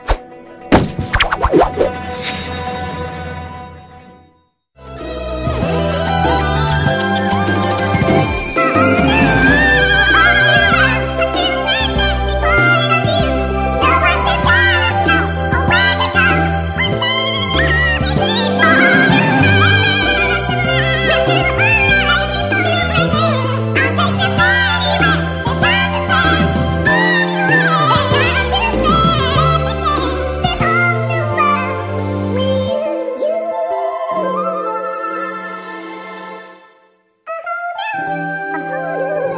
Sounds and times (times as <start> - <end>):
Music: 0.0 - 39.3
Synthetic singing: 8.6 - 35.7, 37.3 - 39.3.